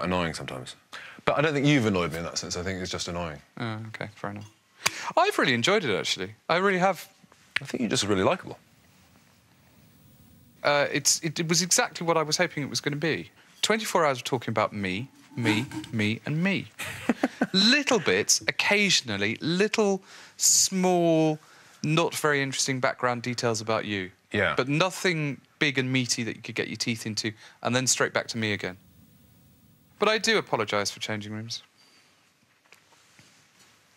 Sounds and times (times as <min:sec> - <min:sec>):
Speech: 0:00.0 - 0:04.5, 0:05.1 - 0:08.6, 0:10.6 - 0:16.8, 0:17.5 - 0:28.8, 0:30.0 - 0:31.7.